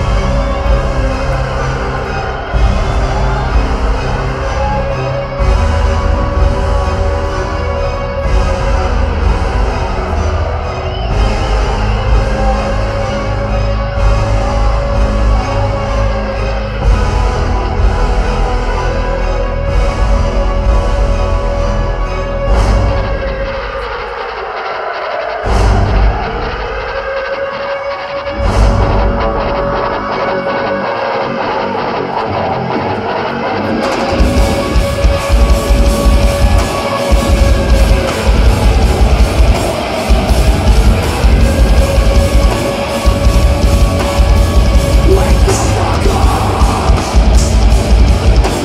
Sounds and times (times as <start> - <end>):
Music: 0.0 - 48.6.